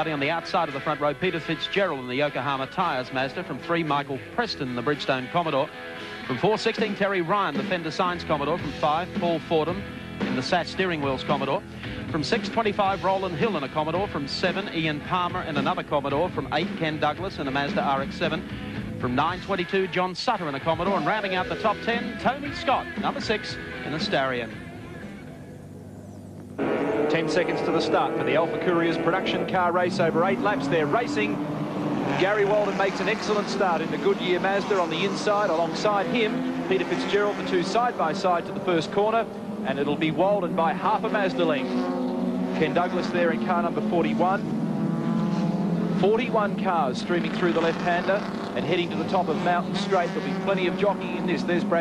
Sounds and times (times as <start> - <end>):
Speech: 0.0 - 5.7, 6.3 - 18.4, 19.0 - 24.6, 27.1 - 31.4, 32.1 - 41.6, 42.6 - 44.4, 46.0 - 51.8
Music: 0.0 - 26.1.